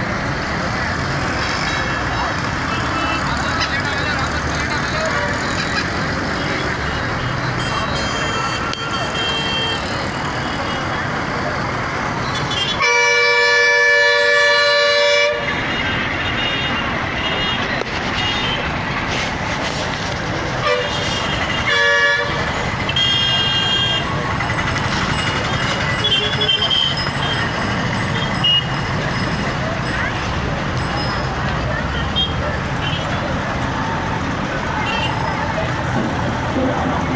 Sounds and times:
Outside, urban or manmade: 0:00.0 - 0:37.1.

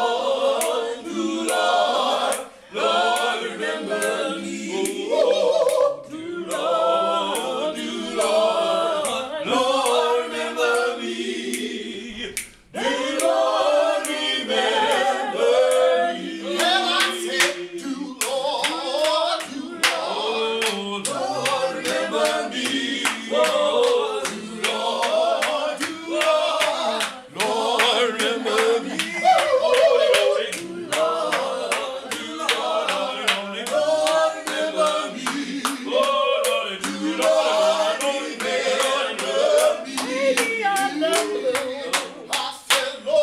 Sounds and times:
Choir: 0:00.0 - 0:43.2
Male singing: 0:16.4 - 0:43.2.

